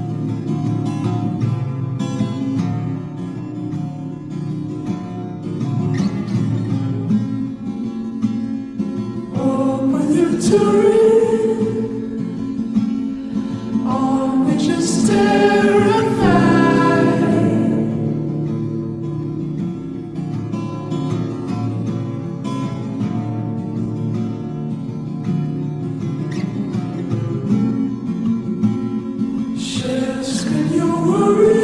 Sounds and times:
Vocal music: 9.3s - 19.8s, 29.5s - 31.6s
Singing: 9.4s - 12.3s, 13.8s - 18.0s, 29.6s - 31.6s.

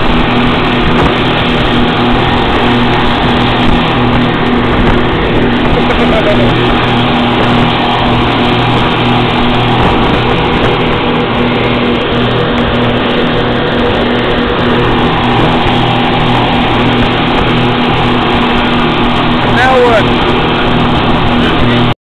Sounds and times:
Motorboat, speedboat: 0.0s - 22.0s
Speech: 19.4s - 20.1s.

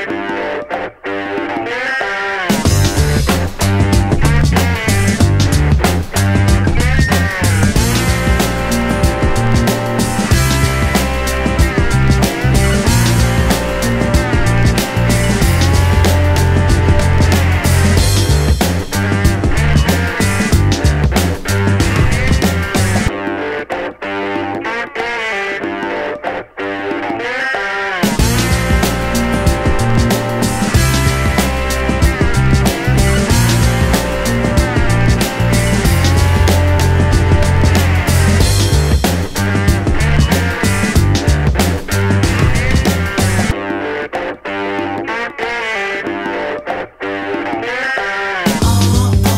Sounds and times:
Music: 0.0s - 49.3s.

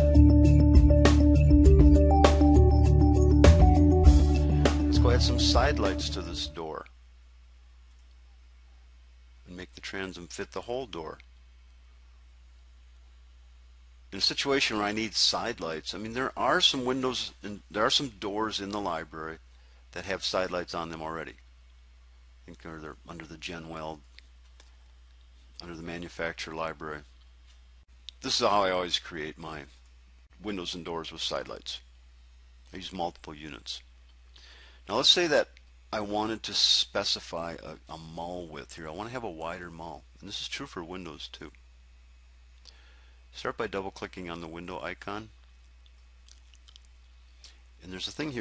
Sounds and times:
Speech: 4.9s - 7.0s, 9.4s - 11.3s, 14.1s - 21.4s, 22.4s - 24.1s, 25.6s - 27.1s, 28.1s - 29.8s, 30.4s - 31.9s, 32.7s - 33.9s, 34.9s - 41.6s, 43.3s - 45.3s, 47.8s - 48.4s.

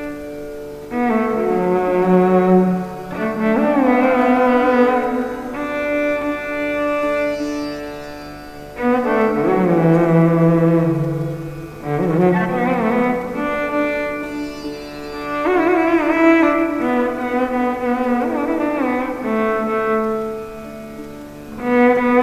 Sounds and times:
Sitar: 0.0s - 22.2s
Violin, fiddle: 0.0s - 22.2s.

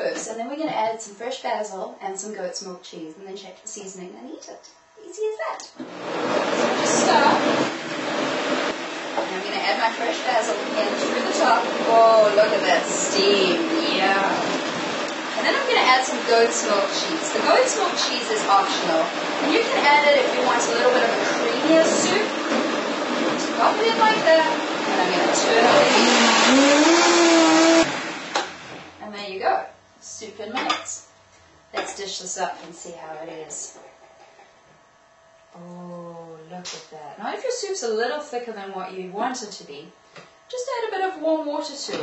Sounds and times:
Blender: 5.8s - 29.0s.

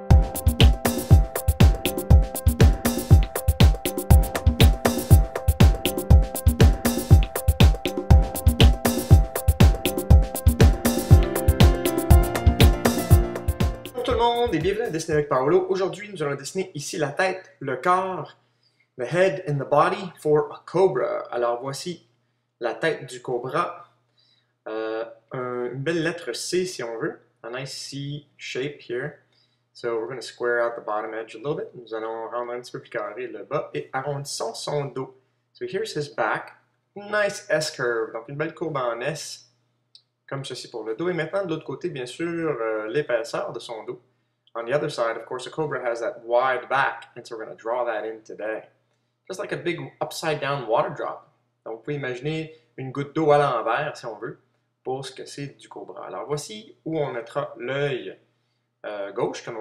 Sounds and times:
Inside, small room: 0.0s - 59.6s
Speech: 14.0s - 18.3s, 19.0s - 22.0s, 22.6s - 23.8s, 24.7s - 29.2s, 29.8s - 39.4s, 40.3s - 44.0s, 44.6s - 48.7s, 49.3s - 58.2s, 58.9s - 59.6s.

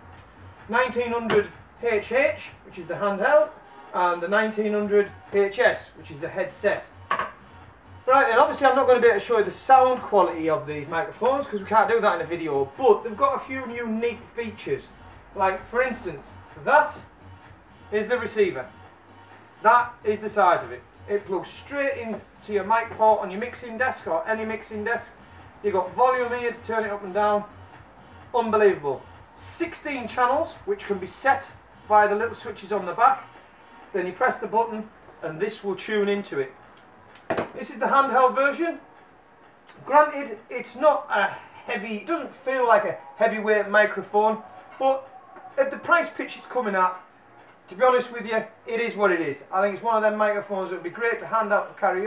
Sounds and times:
Music: 0.0s - 52.0s
Speech: 0.7s - 6.9s, 8.1s - 17.0s, 17.9s - 18.7s, 19.6s - 27.5s, 28.4s - 33.3s, 33.9s - 36.6s, 37.6s - 38.8s, 39.7s - 47.1s, 47.7s - 52.0s.

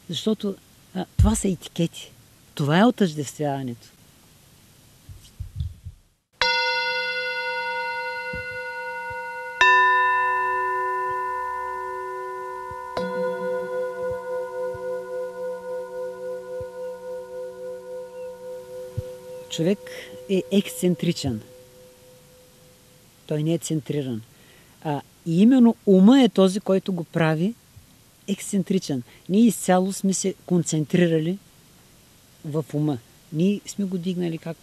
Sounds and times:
Music: 6.4s - 22.9s.

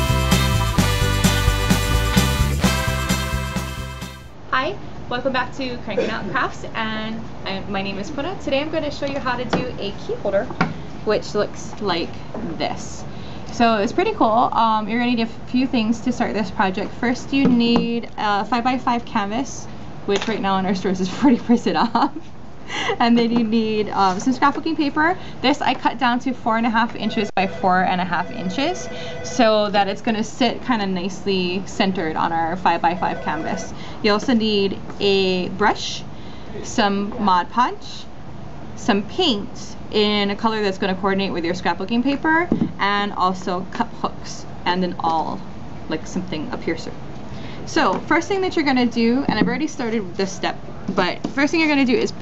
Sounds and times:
Speech: 4.5s - 22.1s, 23.0s - 38.1s, 38.8s - 47.0s, 47.7s - 52.2s.

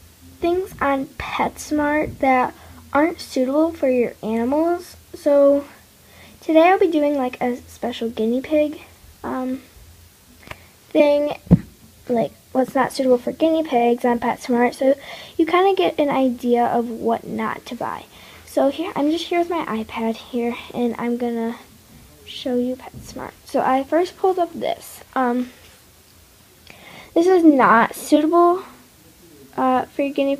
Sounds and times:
Speech: 0.4s - 5.8s, 6.4s - 9.7s, 10.9s - 25.6s, 27.2s - 30.3s.

